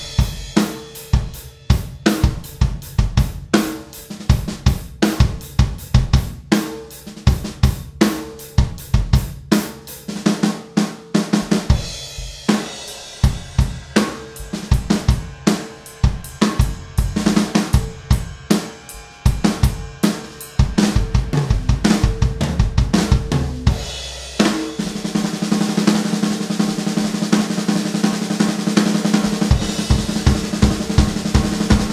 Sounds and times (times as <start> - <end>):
Bass drum: 0.0 - 9.5, 11.4 - 18.6, 19.2 - 25.3, 29.0 - 31.9
Drum kit: 0.0 - 31.9.